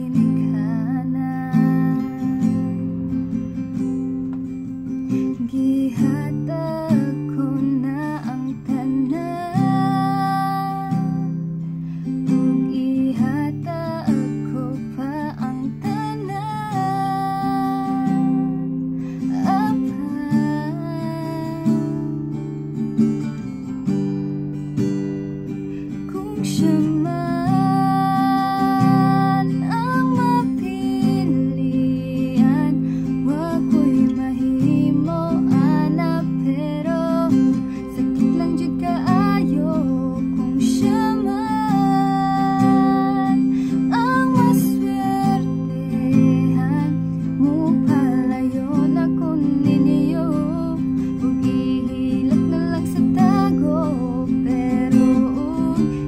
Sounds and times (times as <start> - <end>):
Acoustic guitar: 0.0 - 56.0
Strum: 0.0 - 56.0.